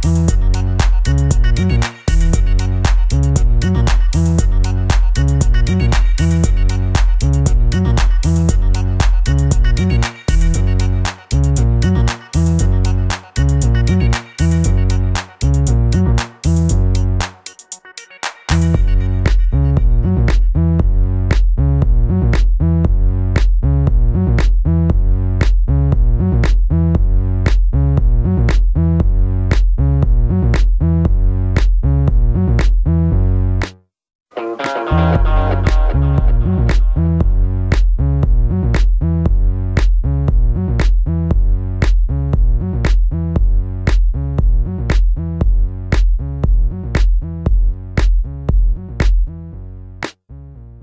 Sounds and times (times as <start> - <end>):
Drum machine: 0.0 - 32.9, 34.6 - 49.4.